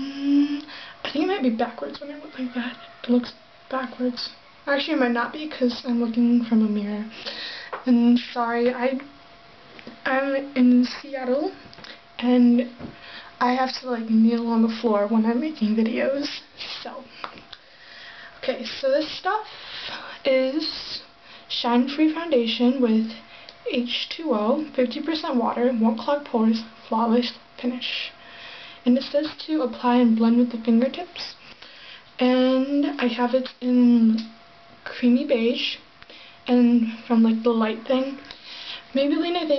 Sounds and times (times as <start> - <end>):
Speech: 0.0 - 7.2, 7.8 - 9.1, 10.0 - 11.6, 12.2 - 12.8, 13.4 - 17.1, 18.4 - 19.5, 20.2 - 28.2, 28.8 - 31.4, 32.2 - 35.9, 36.5 - 38.3, 38.9 - 39.5.